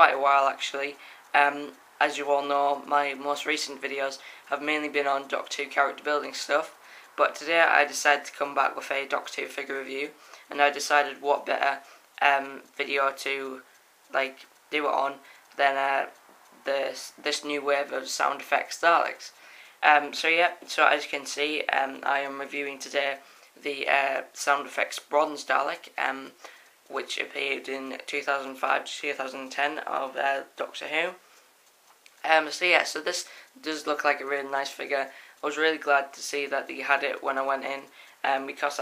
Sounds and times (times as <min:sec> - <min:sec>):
Speech: 0:00.0 - 0:31.2, 0:32.2 - 0:38.8.